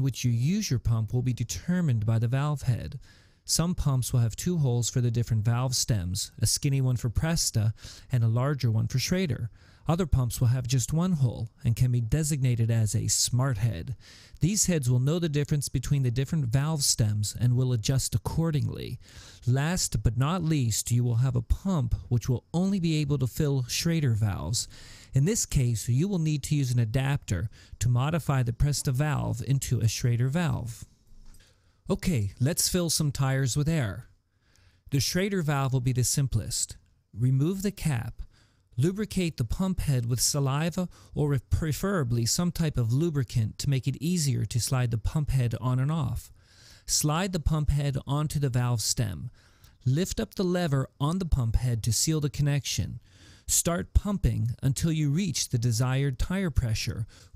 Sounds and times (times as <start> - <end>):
Speech: 0.0 - 30.9, 31.9 - 34.1, 34.9 - 57.3.